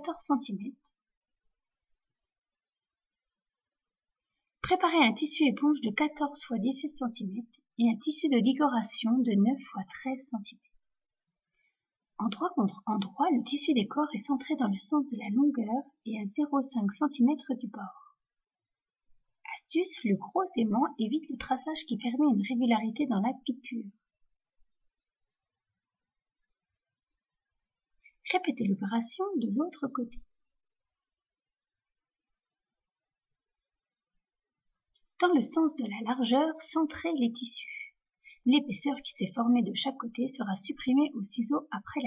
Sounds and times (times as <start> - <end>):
Speech: 0.0 - 0.9, 4.6 - 10.6, 12.2 - 18.2, 19.5 - 24.0, 28.2 - 30.3, 35.2 - 42.0.